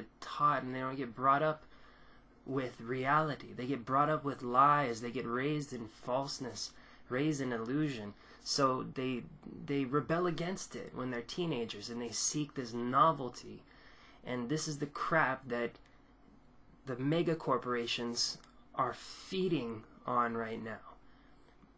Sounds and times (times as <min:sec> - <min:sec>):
Speech: 0:00.0 - 0:01.7, 0:02.5 - 0:15.8, 0:16.8 - 0:21.0.